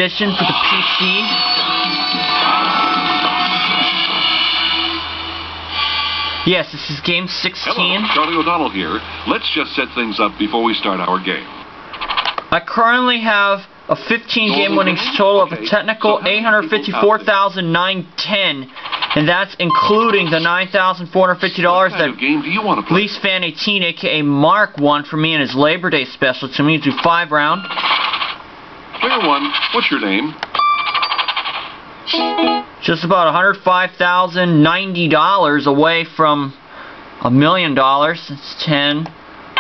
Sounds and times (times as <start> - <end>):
Speech: 0.0 - 1.5, 6.5 - 11.6, 12.5 - 27.7, 29.0 - 30.4, 32.8 - 36.6, 37.2 - 39.2.